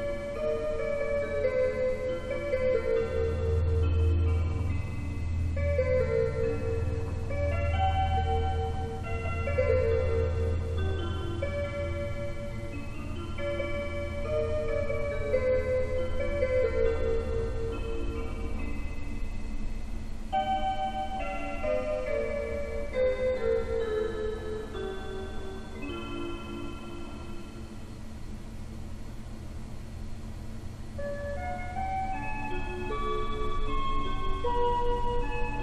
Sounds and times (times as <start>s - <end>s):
Music: 0.0s - 28.1s, 30.7s - 35.6s.